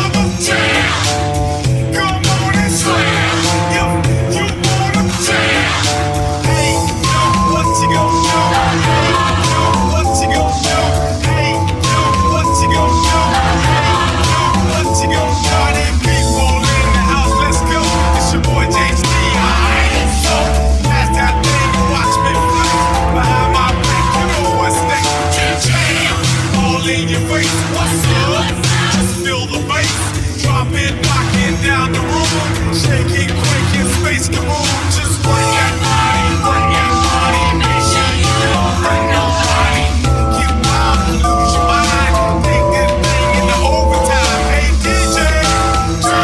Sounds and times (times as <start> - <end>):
Exciting music: 0.0 - 46.2.